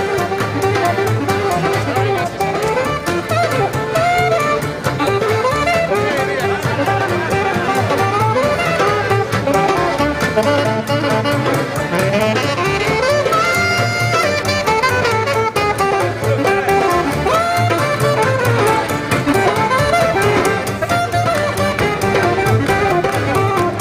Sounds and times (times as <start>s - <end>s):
Jazz: 0.0s - 23.8s
Speech: 4.9s - 8.9s.